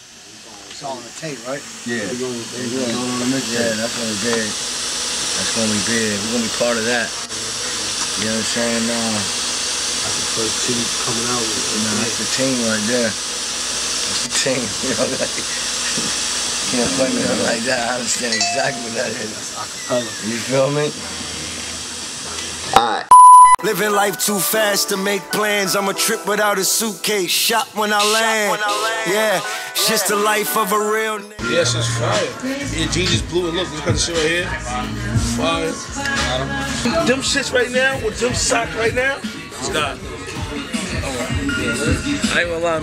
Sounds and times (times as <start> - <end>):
Speech: 0.2 - 4.6, 5.3 - 9.4, 10.0 - 13.2, 14.1 - 21.3, 22.2 - 42.8
Music: 18.3 - 19.6, 23.6 - 42.8.